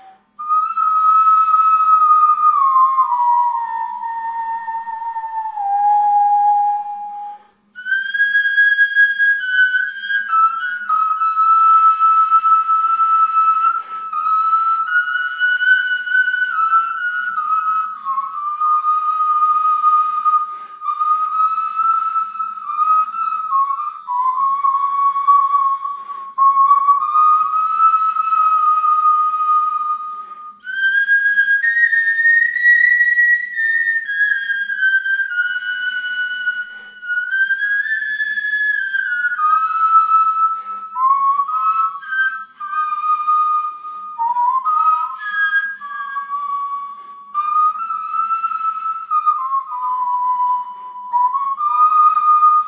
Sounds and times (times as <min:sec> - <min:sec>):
Flute: 0:00.0 - 0:52.6.